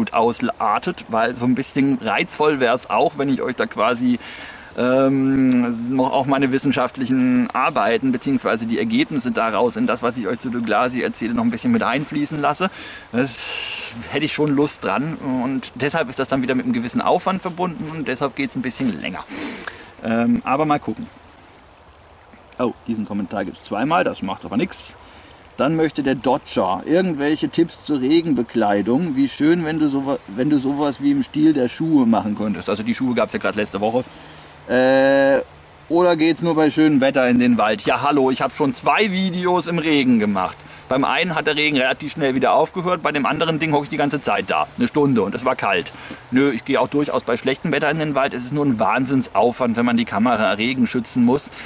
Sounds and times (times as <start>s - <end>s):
Speech: 0.0s - 4.2s, 4.8s - 19.3s, 20.0s - 21.1s, 22.6s - 25.0s, 25.6s - 34.1s, 34.7s - 51.5s
Outside, rural or natural: 0.0s - 51.6s.